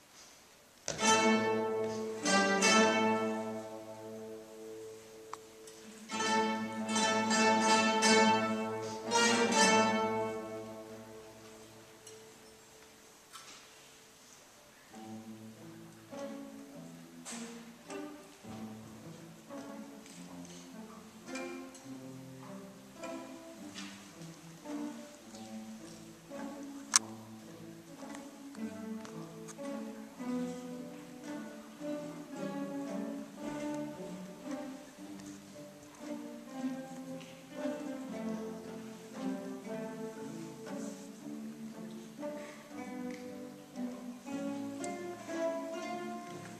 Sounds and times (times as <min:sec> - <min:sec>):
Orchestra: 0:00.0 - 0:46.5.